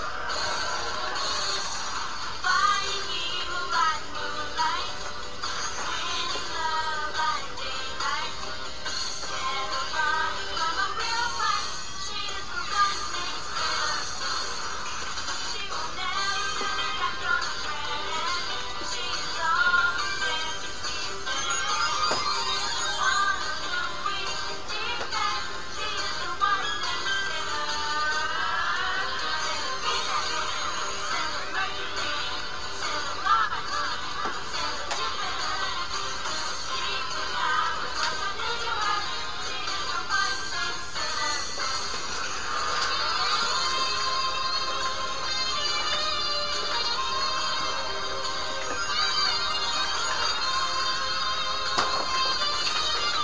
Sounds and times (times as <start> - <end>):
Music: 0.0 - 53.2
Female singing: 2.4 - 5.0, 5.8 - 8.4, 9.3 - 14.2, 15.5 - 21.8, 23.0 - 41.8.